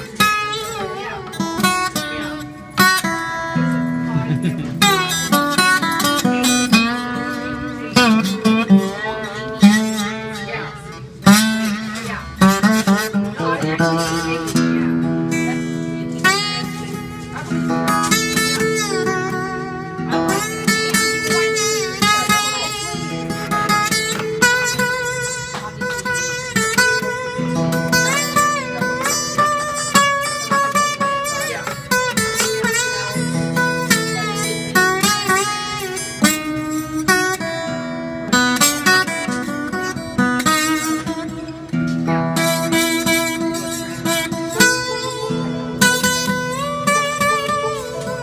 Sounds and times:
Acoustic guitar: 0.0 - 48.2
Electric guitar: 0.0 - 48.2
Strum: 0.0 - 48.2
Speech: 0.2 - 2.5, 7.5 - 11.1, 11.9 - 17.5, 21.0 - 24.0, 28.1 - 29.7, 31.2 - 35.6.

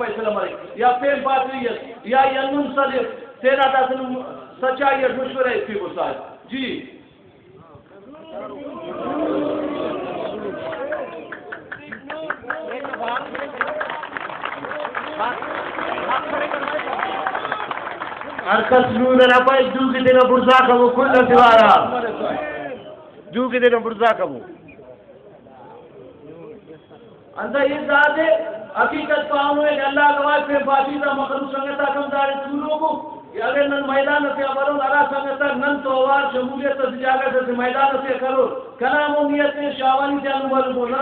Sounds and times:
Male speech, man speaking: 0.0 - 7.0, 7.6 - 9.0, 10.4 - 17.0, 18.5 - 24.7, 25.6 - 41.0.

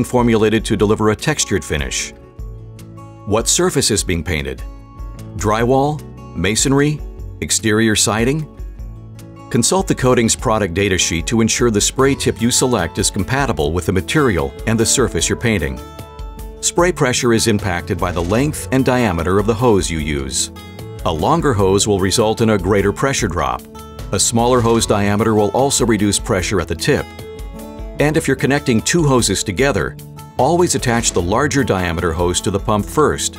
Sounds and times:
Speech: 0.0 - 2.2, 3.3 - 4.6, 5.4 - 8.5, 9.5 - 15.8, 16.6 - 27.0, 28.0 - 33.3
Music: 0.0 - 33.3.

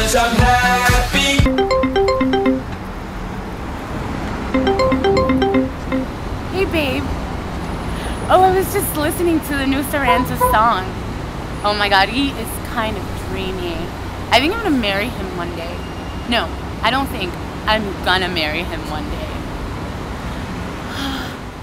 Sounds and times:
Speech: 6.6 - 7.1, 8.2 - 11.0, 11.6 - 19.4.

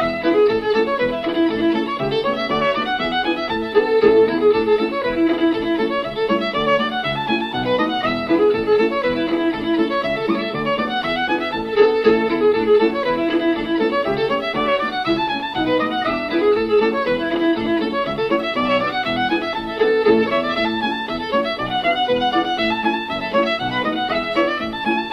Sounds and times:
Violin, fiddle: 0.0 - 25.1.

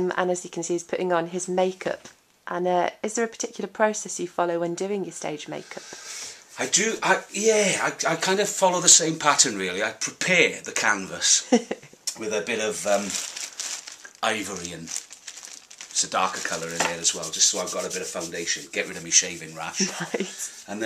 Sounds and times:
Speech: 6.6 - 11.4, 12.1 - 13.2, 14.2 - 14.9, 16.0 - 20.8.

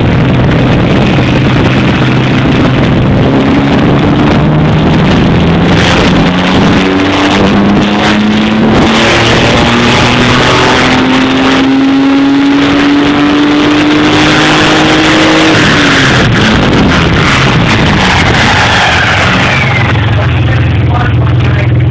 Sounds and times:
Speech: 20.1 - 21.9.

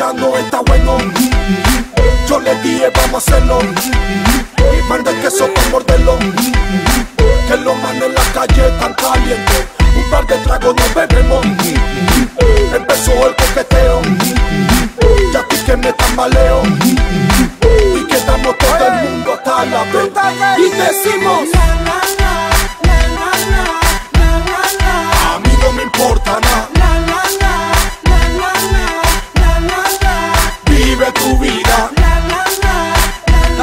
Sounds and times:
Reggae: 0.0 - 33.6.

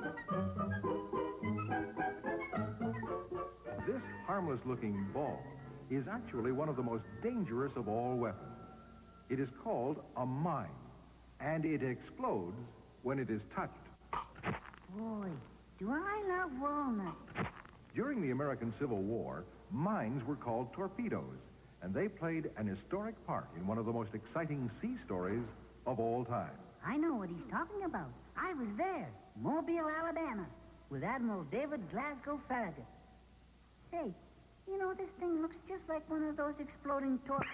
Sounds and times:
Speech: 3.8 - 8.5, 9.3 - 13.9, 14.9 - 17.3, 18.0 - 32.9, 33.9 - 37.5.

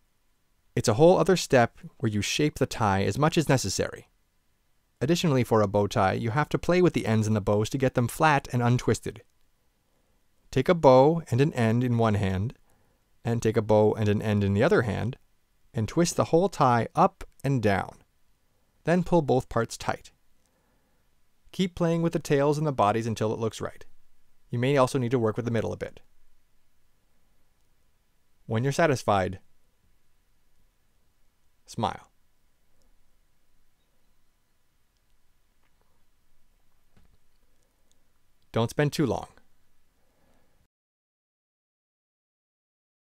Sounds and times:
Inside, small room: 0.0 - 40.7
Speech: 0.8 - 4.1, 5.0 - 9.3, 10.5 - 12.6, 13.2 - 15.2, 15.8 - 18.0, 18.8 - 20.2, 21.5 - 23.9, 24.5 - 26.1, 28.5 - 29.4, 31.7 - 32.1, 38.5 - 39.5.

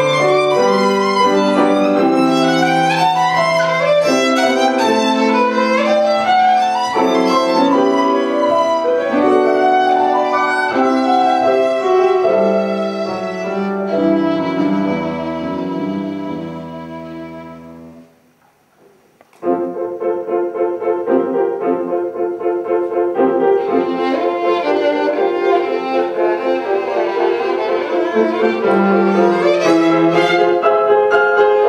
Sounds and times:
Violin, fiddle: 0.0 - 17.9, 23.2 - 31.6
Piano: 0.0 - 31.6.

